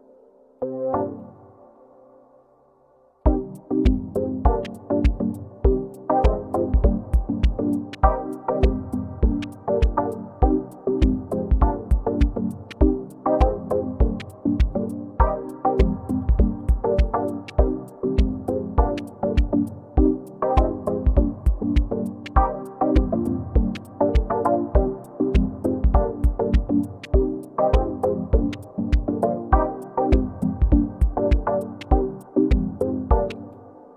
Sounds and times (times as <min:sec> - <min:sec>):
Music: 0:00.0 - 0:33.9.